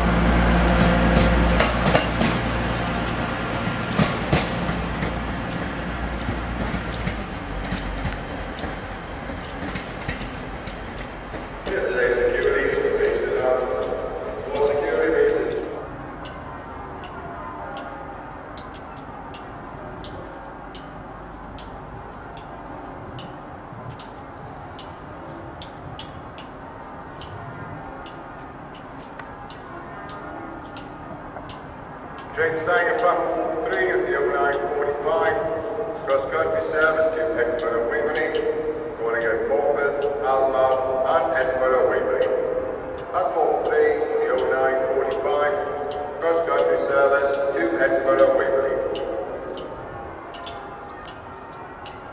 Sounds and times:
Railroad car, train wagon: 0.0 - 52.1
Train: 0.0 - 52.1.

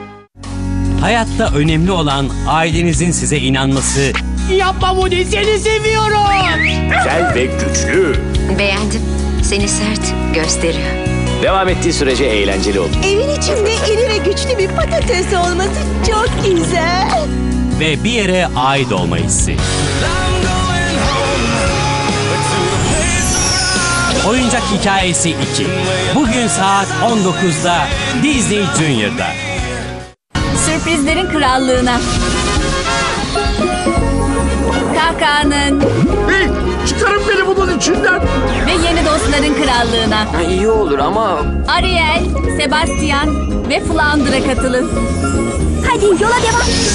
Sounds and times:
Music: 0.0 - 46.9.

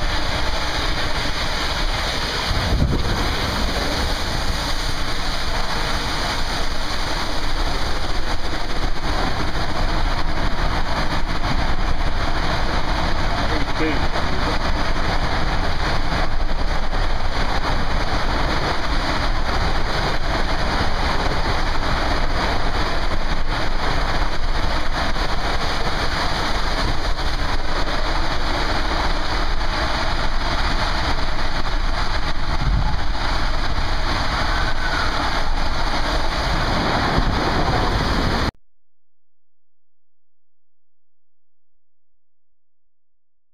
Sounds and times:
Speech: 13.5 - 14.6.

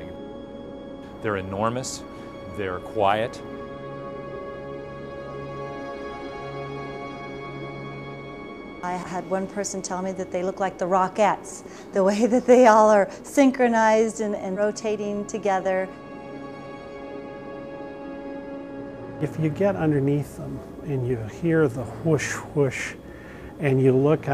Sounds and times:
Music: 0.0 - 24.3.

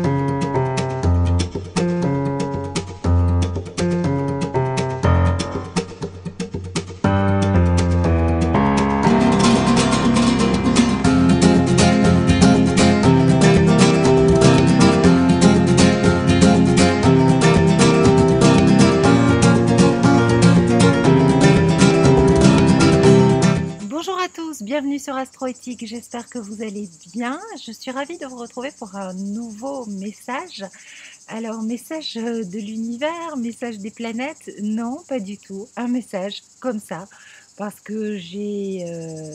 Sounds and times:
Speech: 23.8 - 39.3.

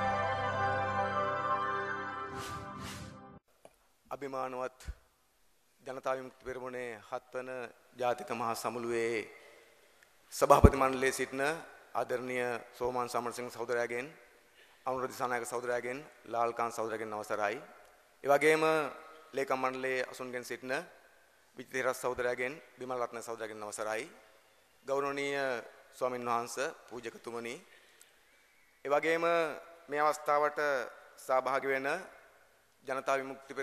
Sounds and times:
Narration, monologue: 3.4 - 33.6
Male speech, man speaking: 4.1 - 5.0, 5.9 - 9.4, 10.3 - 14.2, 14.9 - 20.9, 21.6 - 24.2, 24.9 - 27.6, 28.9 - 32.1, 32.9 - 33.6.

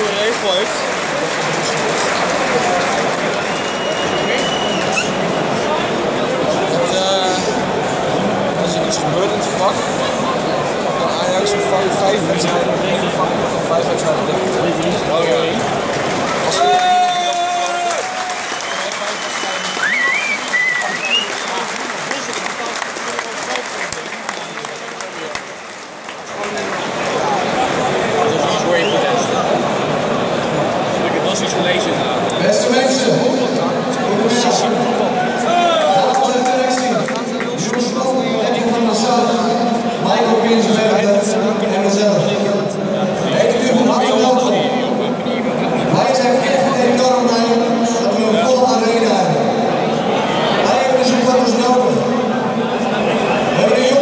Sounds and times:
Male speech, man speaking: 0.0 - 2.9, 5.6 - 7.6, 8.6 - 10.2, 10.9 - 15.7, 16.5 - 17.9, 26.3 - 29.6, 31.0 - 49.6, 50.5 - 54.0.

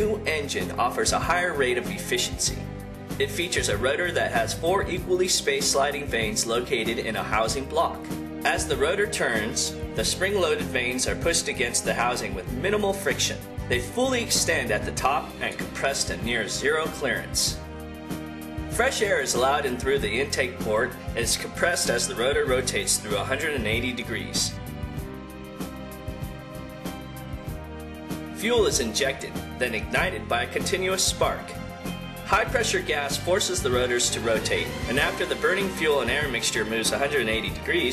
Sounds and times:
Speech: 0.0 - 2.6, 3.2 - 17.6, 18.8 - 24.6, 28.4 - 31.6, 32.3 - 37.9
Music: 0.0 - 37.9.

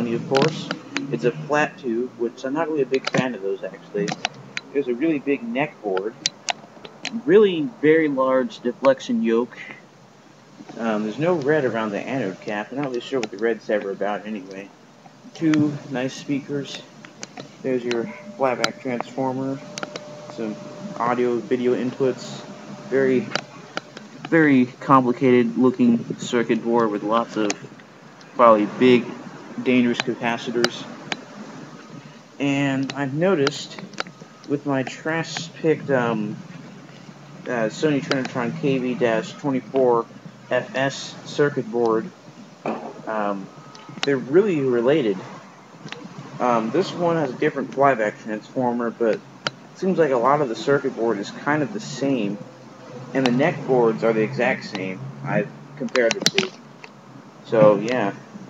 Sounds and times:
Speech: 0.0 - 4.2, 4.8 - 6.2, 7.2 - 9.8, 10.7 - 14.7, 15.3 - 16.9, 17.6 - 19.7, 20.3 - 23.4, 24.3 - 27.7, 28.4 - 30.9, 32.4 - 33.8, 34.5 - 36.4, 37.5 - 42.1, 43.1 - 45.3, 46.4 - 49.2, 49.8 - 52.4, 53.1 - 56.6, 57.5 - 58.3.

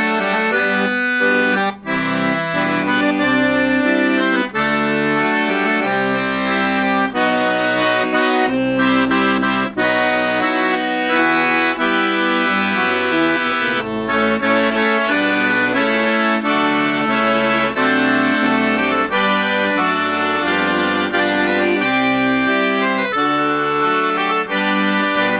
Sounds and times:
Accordion: 0.0 - 25.3.

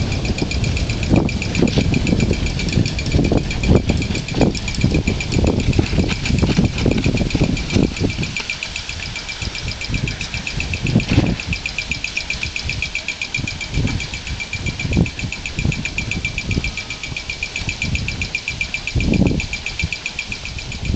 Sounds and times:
Wind noise (microphone): 0.0 - 20.9.

